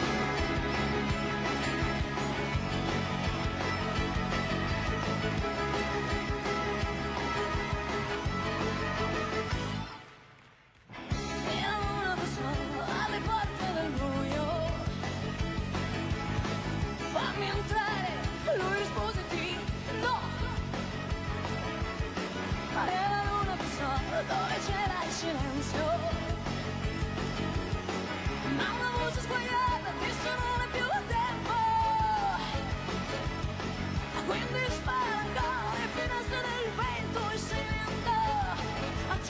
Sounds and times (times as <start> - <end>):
Progressive rock: 0.0 - 39.3.